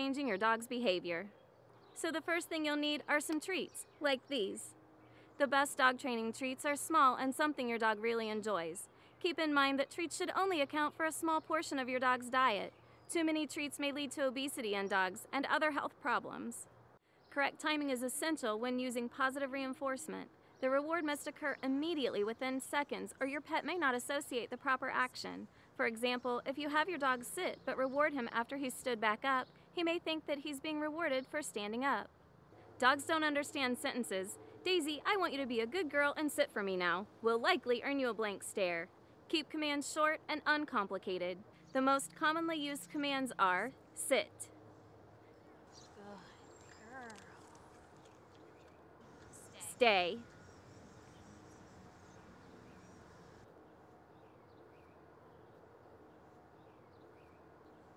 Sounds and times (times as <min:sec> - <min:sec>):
Speech: 0:00.0 - 0:01.3, 0:02.0 - 0:04.8, 0:05.4 - 0:16.7, 0:17.3 - 0:32.1, 0:32.8 - 0:44.5, 0:46.0 - 0:47.4, 0:49.4 - 0:50.2.